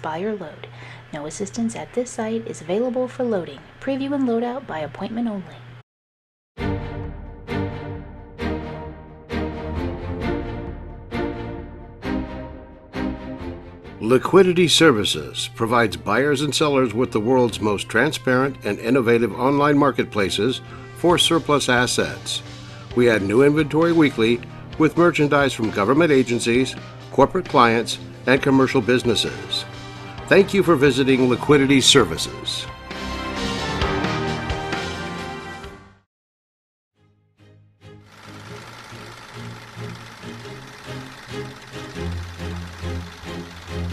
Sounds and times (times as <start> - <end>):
Speech: 0.0 - 5.7, 14.0 - 22.4, 23.0 - 29.7, 30.3 - 32.7
Music: 6.6 - 36.1, 37.0 - 43.9.